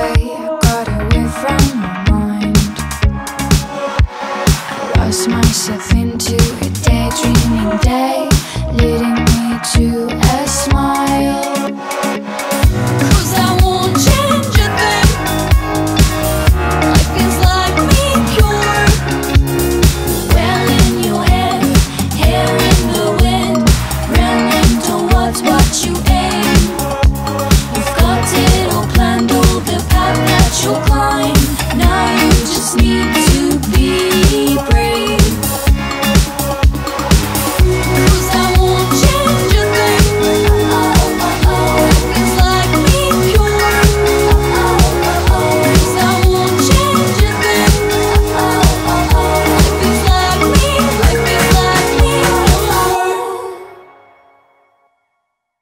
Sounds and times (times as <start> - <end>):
Music: 0.0 - 55.6.